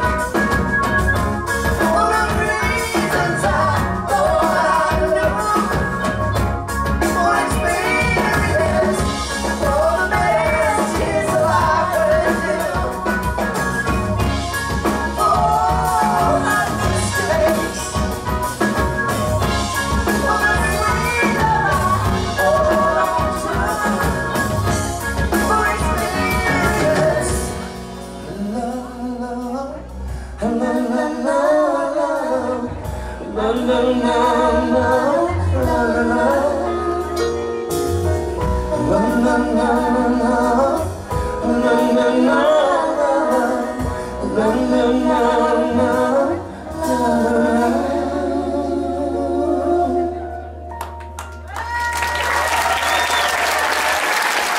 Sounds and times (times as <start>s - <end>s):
A capella: 1.5s - 50.7s.